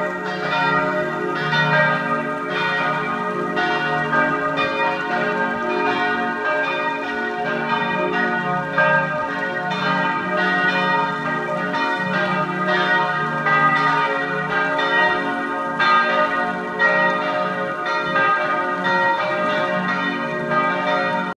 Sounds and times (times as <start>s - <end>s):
Change ringing (campanology): 0.0s - 21.3s.